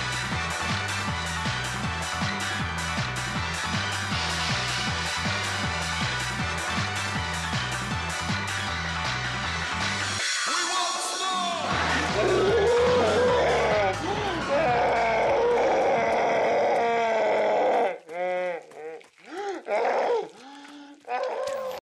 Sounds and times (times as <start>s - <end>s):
Animal: 14.6s - 21.8s.